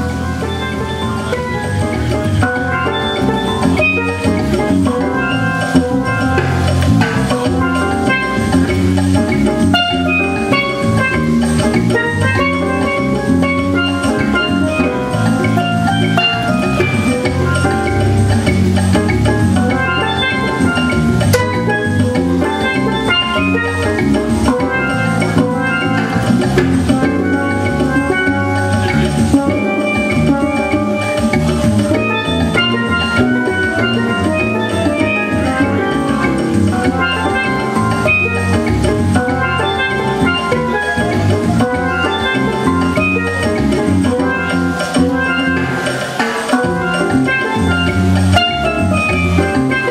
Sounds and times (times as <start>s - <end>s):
Independent music: 0.0s - 49.9s.